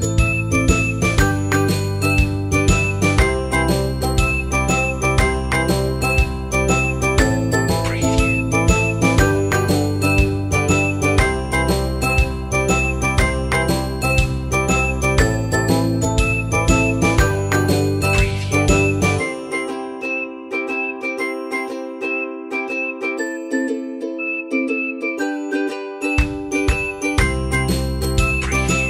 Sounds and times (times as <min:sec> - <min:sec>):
Jingle, tinkle: 0:00.0 - 0:28.8
Music for children: 0:00.0 - 0:28.8
Glass: 0:15.6 - 0:19.9, 0:25.2 - 0:28.8
Whistling: 0:18.0 - 0:26.3.